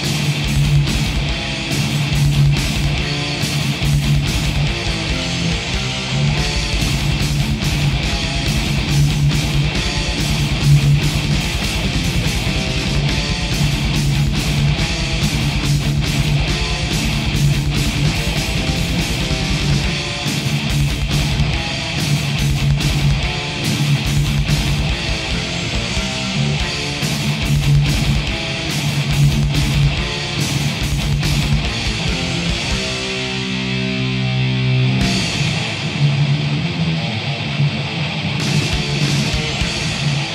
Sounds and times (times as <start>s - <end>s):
Electric guitar: 0.0s - 40.3s.